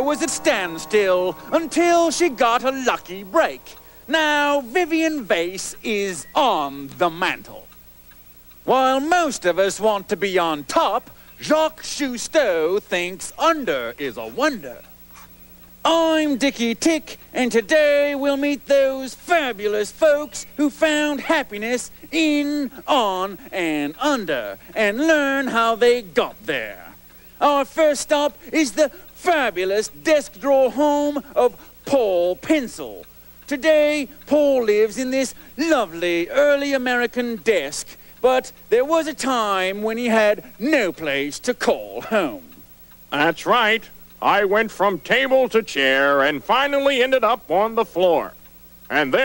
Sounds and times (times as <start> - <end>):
Speech: 0.0 - 7.7, 8.6 - 14.9, 15.9 - 49.2.